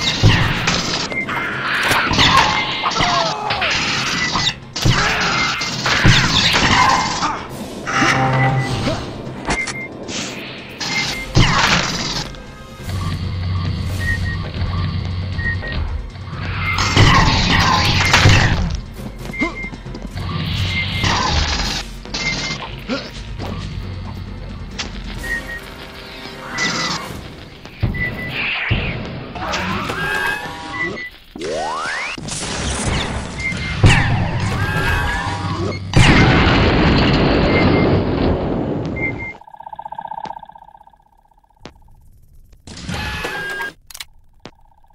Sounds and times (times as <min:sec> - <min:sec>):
Music: 0:00.1 - 0:31.1.